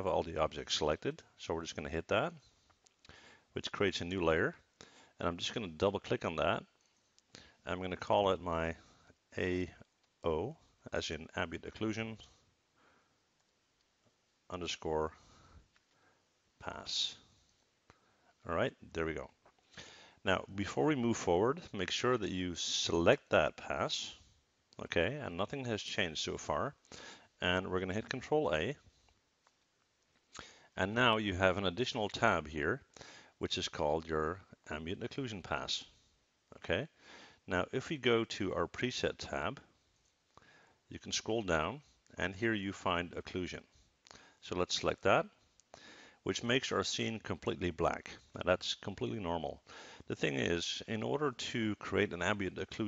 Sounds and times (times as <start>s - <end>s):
Speech: 0.0s - 2.4s, 3.6s - 4.6s, 5.2s - 6.8s, 7.6s - 12.3s, 14.5s - 15.2s, 16.6s - 17.3s, 18.4s - 19.4s, 20.2s - 24.2s, 24.8s - 26.8s, 27.4s - 28.8s, 30.8s - 35.9s, 36.5s - 39.7s, 40.9s - 43.7s, 44.4s - 45.4s, 46.2s - 52.8s.